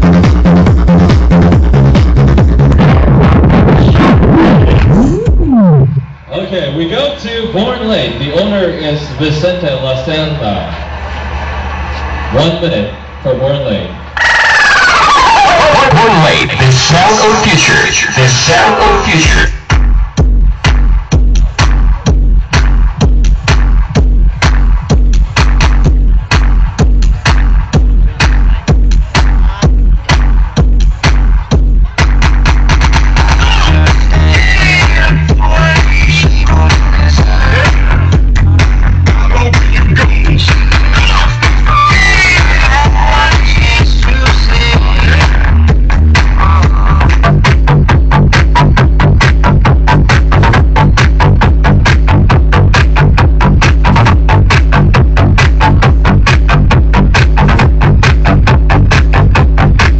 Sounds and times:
Speech: 6.3 - 10.8, 12.3 - 14.0, 15.3 - 19.6.

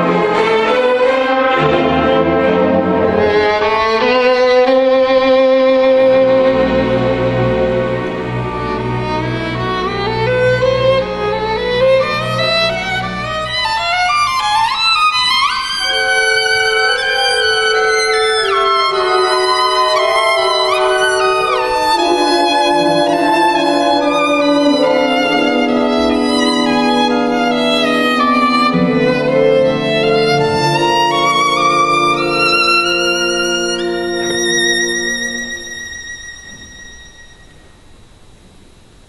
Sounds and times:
Violin, fiddle: 0.0 - 37.7.

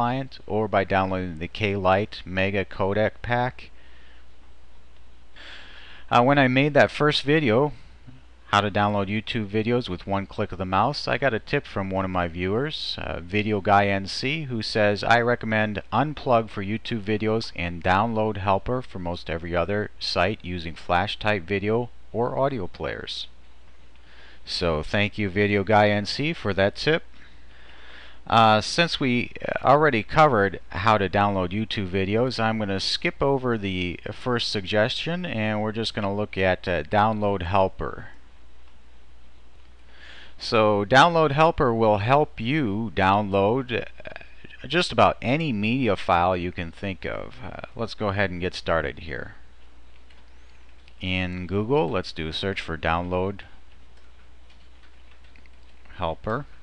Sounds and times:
Speech: 0.0 - 3.7, 6.1 - 7.8, 8.5 - 23.4, 24.4 - 27.1, 28.3 - 38.2, 40.4 - 49.4, 51.0 - 53.6, 55.9 - 56.5.

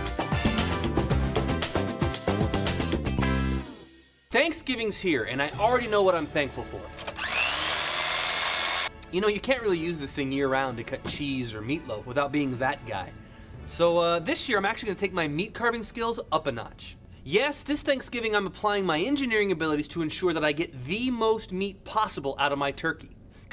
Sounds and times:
Chainsaw: 7.2 - 8.9.

